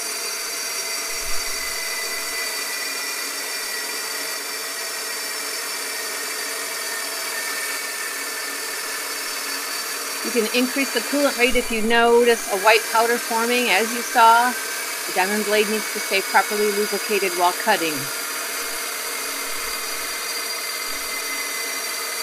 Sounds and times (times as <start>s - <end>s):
Speech: 10.3s - 18.1s.